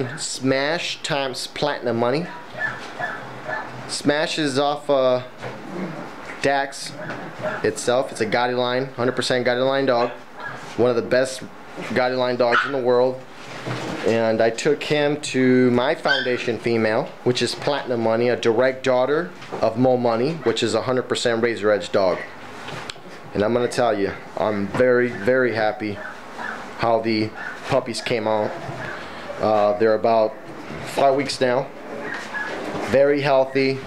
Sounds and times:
Speech: 0.0s - 2.4s, 3.9s - 5.3s, 6.4s - 7.0s, 7.6s - 10.2s, 10.8s - 13.3s, 14.0s - 22.3s, 23.3s - 26.1s, 26.8s - 28.6s, 29.4s - 31.7s, 32.9s - 33.8s.

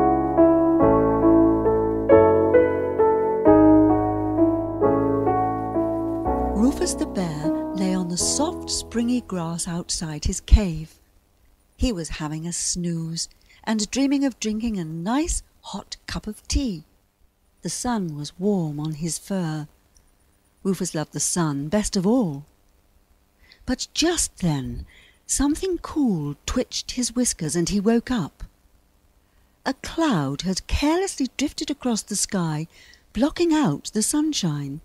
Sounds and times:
Speech: 6.6s - 11.0s, 11.8s - 16.9s, 17.6s - 19.7s, 20.6s - 22.5s, 23.6s - 28.5s, 29.7s - 34.8s.

